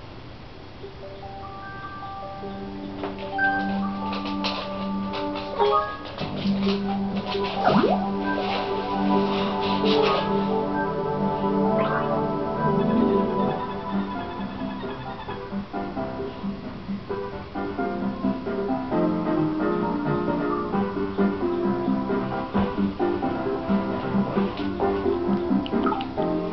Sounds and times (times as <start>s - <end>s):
Music: 0.8s - 26.5s.